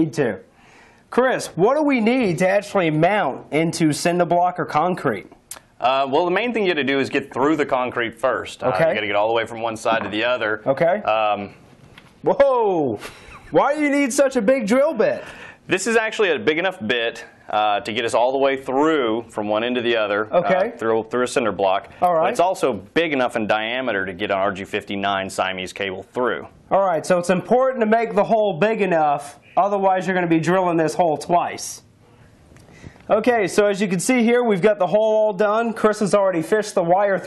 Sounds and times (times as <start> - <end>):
Speech: 0.0 - 0.5, 1.1 - 11.6, 12.3 - 31.9, 33.1 - 37.2.